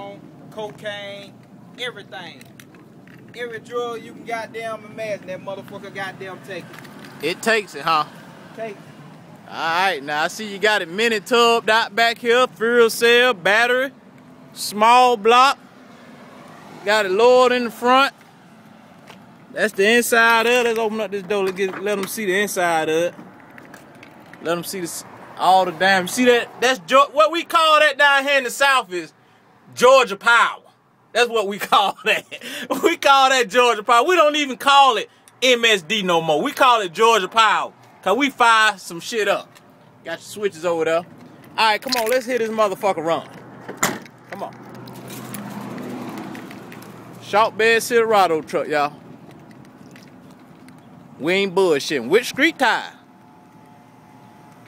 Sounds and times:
Speech: 0:00.0 - 0:02.4, 0:03.4 - 0:08.8, 0:09.5 - 0:14.0, 0:14.6 - 0:15.6, 0:16.9 - 0:18.1, 0:19.6 - 0:23.2, 0:24.4 - 0:29.1, 0:29.7 - 0:39.5, 0:40.1 - 0:43.3, 0:44.4 - 0:44.6, 0:47.2 - 0:49.0, 0:51.2 - 0:53.0
Vehicle: 0:00.0 - 0:54.6.

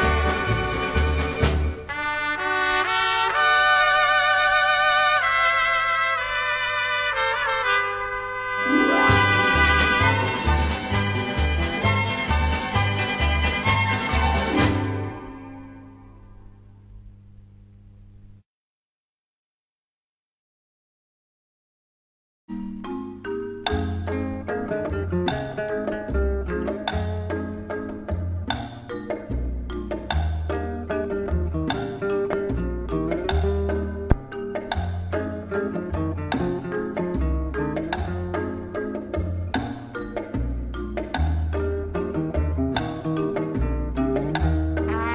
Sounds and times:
Vibraphone: 0:22.5 - 0:31.5.

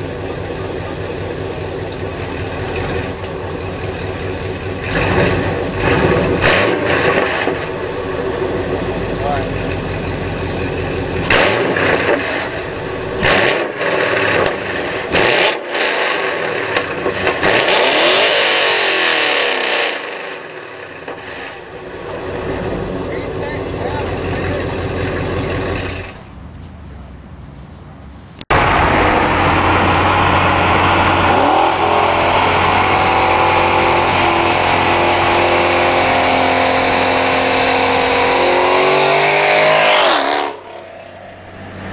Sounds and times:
Car: 0:00.0 - 0:41.9
Medium engine (mid frequency): 0:00.0 - 0:41.9
Outside, urban or manmade: 0:00.0 - 0:41.9
Speech: 0:09.2 - 0:09.5, 0:23.1 - 0:24.8.

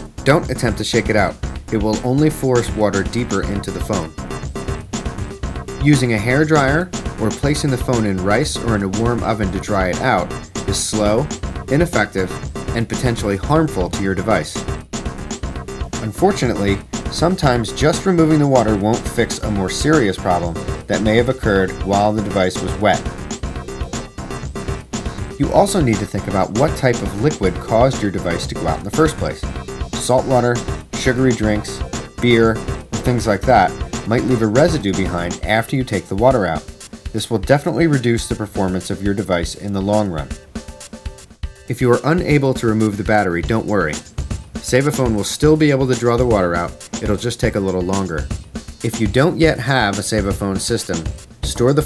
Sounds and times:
Music: 0:00.0 - 0:51.8
Speech: 0:00.2 - 0:04.2, 0:05.8 - 0:14.6, 0:16.0 - 0:23.1, 0:25.4 - 0:40.4, 0:41.7 - 0:51.8.

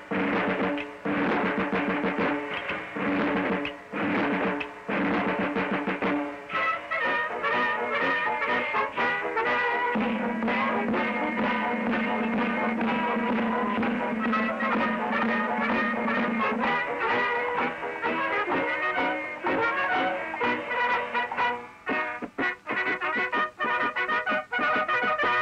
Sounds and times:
Music: 0:00.0 - 0:25.4.

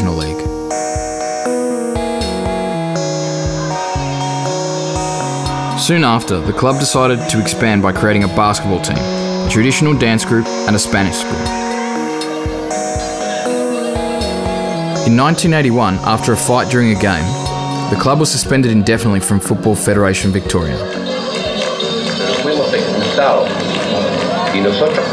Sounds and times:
Speech: 0:00.0 - 0:00.5, 0:05.8 - 0:11.6, 0:15.1 - 0:20.9
Music: 0:00.0 - 0:25.1.

